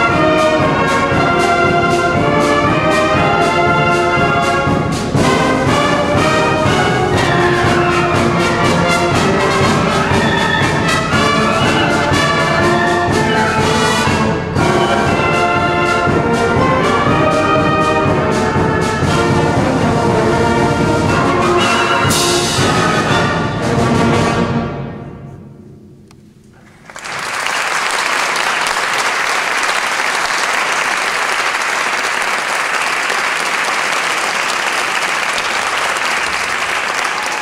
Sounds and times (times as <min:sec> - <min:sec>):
Classical music: 0:00.0 - 0:26.8
Orchestra: 0:00.0 - 0:37.4.